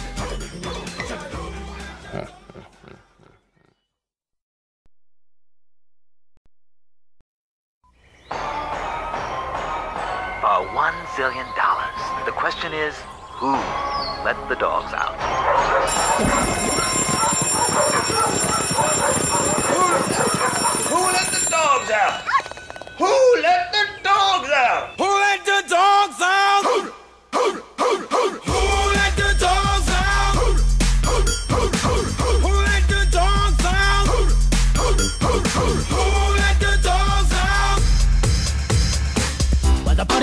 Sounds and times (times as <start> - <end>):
Dog: 15.4 - 21.2.